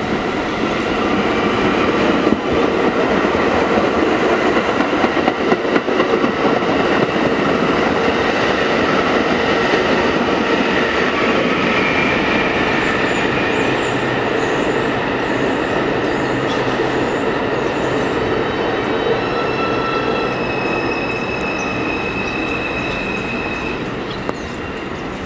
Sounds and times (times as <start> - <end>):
Railroad car, train wagon: 0.0 - 25.2
Subway, metro, underground: 0.0 - 25.2
Train: 0.0 - 25.2
Clickety-clack: 2.2 - 11.7.